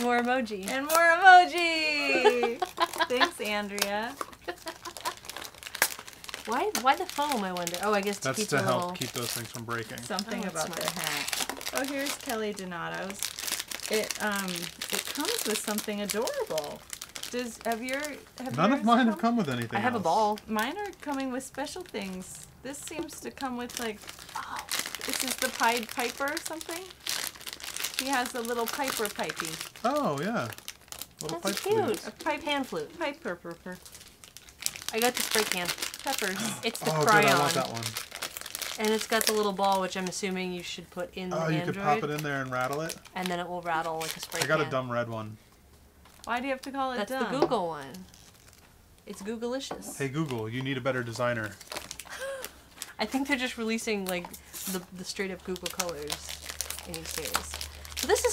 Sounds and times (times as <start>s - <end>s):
Crumpling, crinkling: 0.0s - 40.6s, 41.6s - 45.1s, 46.0s - 49.1s, 50.0s - 58.3s
Inside, small room: 0.0s - 58.3s
Speech: 7.8s - 12.1s, 18.4s - 20.4s, 29.9s - 30.5s, 31.2s - 33.0s, 36.1s - 37.9s, 41.3s - 43.4s, 44.0s - 45.4s, 46.8s - 48.0s.